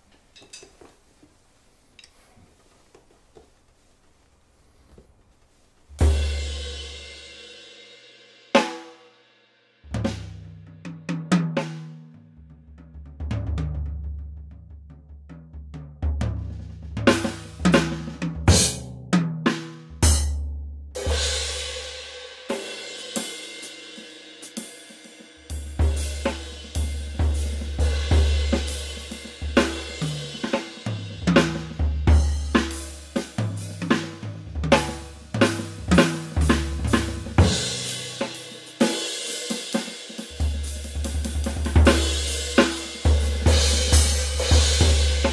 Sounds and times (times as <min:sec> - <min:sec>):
Music: 0:06.0 - 0:45.3.